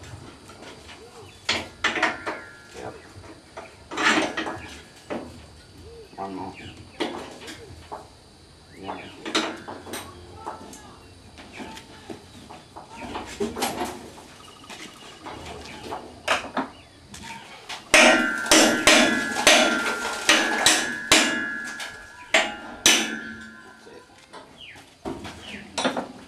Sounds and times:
Speech: 0:06.1 - 0:06.7, 0:08.7 - 0:09.2, 0:10.0 - 0:12.3.

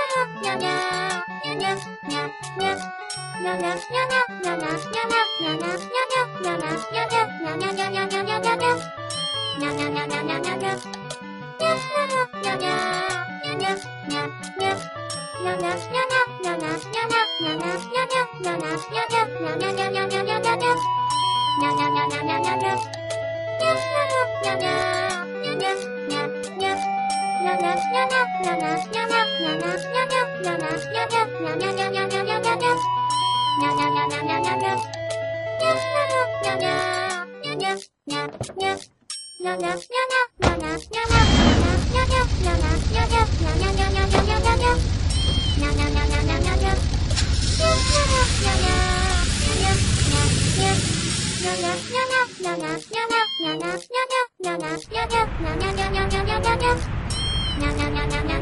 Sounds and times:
Music: 0:00.0 - 0:58.4.

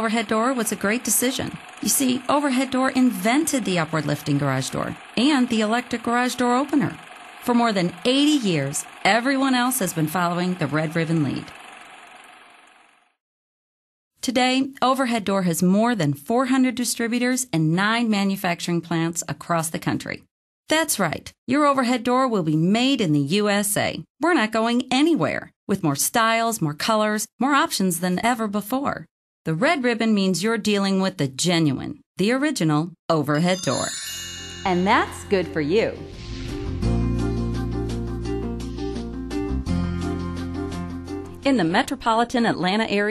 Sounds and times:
Speech: 0:00.0 - 0:11.5, 0:14.2 - 0:34.0, 0:34.7 - 0:36.0, 0:41.4 - 0:43.1.

